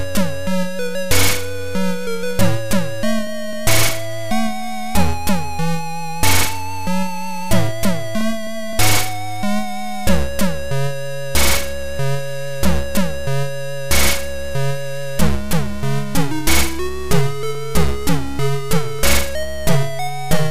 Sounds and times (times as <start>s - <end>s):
Video game music: 0.0s - 20.5s.